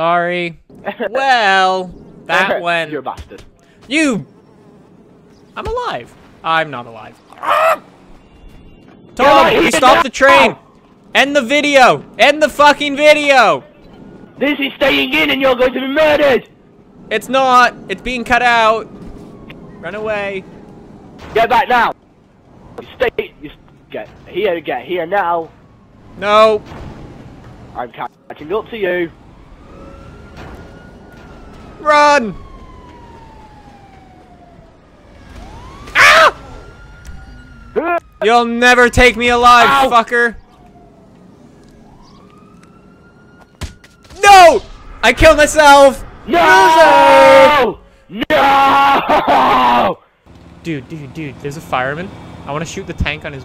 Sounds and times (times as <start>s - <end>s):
Speech: 37.8s - 40.4s, 44.2s - 48.4s, 50.6s - 53.4s.